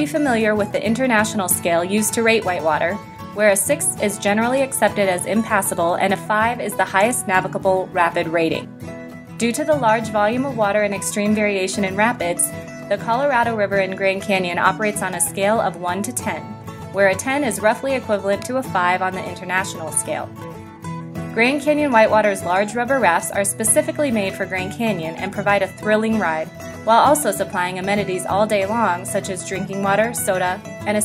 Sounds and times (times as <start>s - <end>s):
Speech: 0.0s - 8.7s, 9.4s - 20.3s, 21.4s - 31.0s
Music: 0.0s - 31.0s.